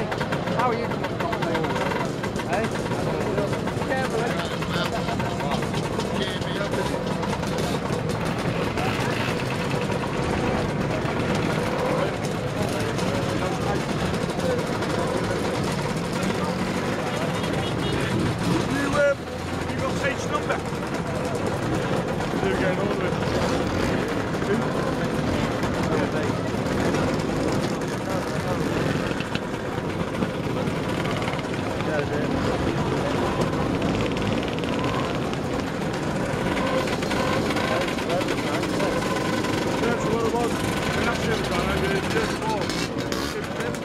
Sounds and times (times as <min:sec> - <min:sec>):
Motorcycle: 0:00.0 - 0:43.8.